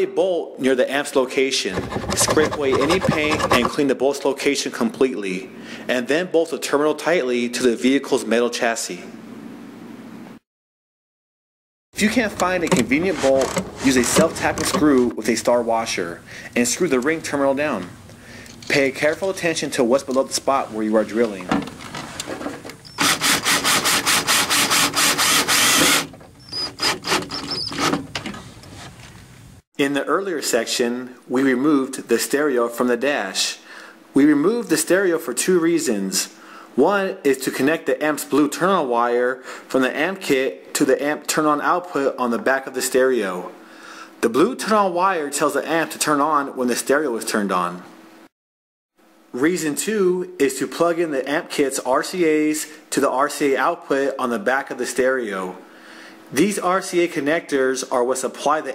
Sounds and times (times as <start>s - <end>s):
Speech: 0.0s - 9.2s, 12.0s - 18.0s, 18.7s - 21.6s, 29.8s - 33.6s, 34.2s - 43.6s, 44.2s - 47.9s, 49.4s - 55.6s, 56.3s - 58.7s.